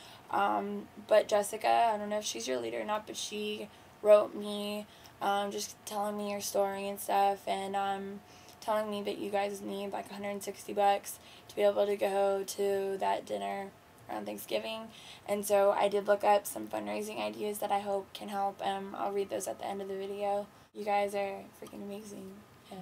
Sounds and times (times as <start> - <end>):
Speech: 0.3 - 22.8.